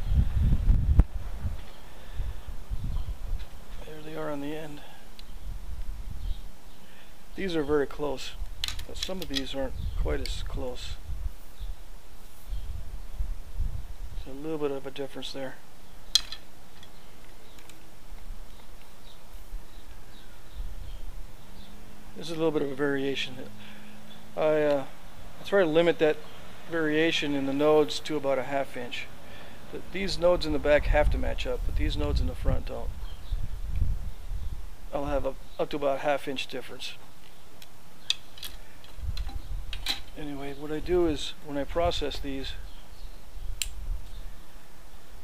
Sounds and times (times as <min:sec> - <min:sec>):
Speech: 0:03.8 - 0:04.9, 0:07.4 - 0:11.0, 0:14.2 - 0:15.6, 0:22.2 - 0:23.5, 0:24.4 - 0:29.1, 0:29.7 - 0:32.9, 0:34.9 - 0:37.0, 0:40.2 - 0:42.6.